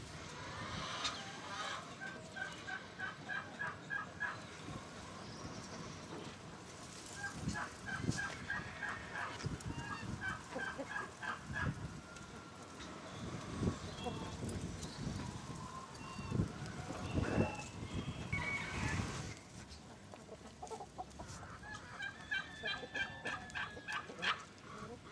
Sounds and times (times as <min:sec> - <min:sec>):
Chicken, rooster: 0:00.4 - 0:04.8, 0:06.0 - 0:25.1.